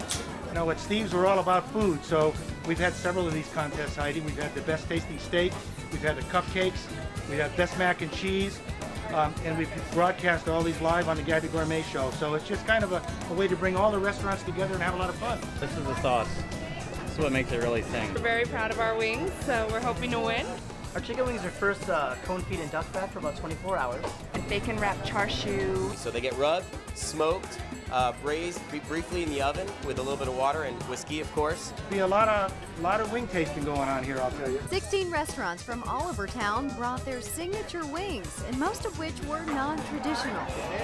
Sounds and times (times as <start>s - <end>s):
Music: 0.0s - 40.8s.